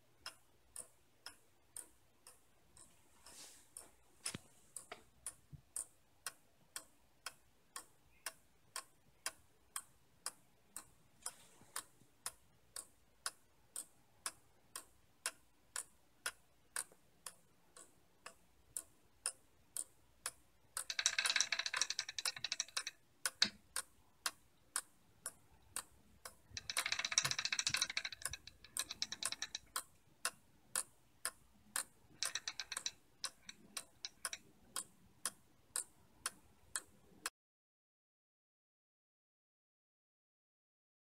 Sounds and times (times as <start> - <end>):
Tick-tock: 0.0 - 37.3.